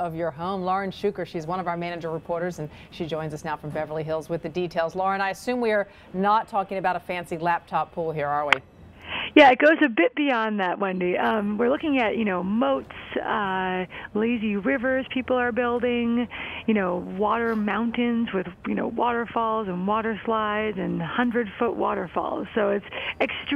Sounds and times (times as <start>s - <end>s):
Speech: 9.4s - 23.5s.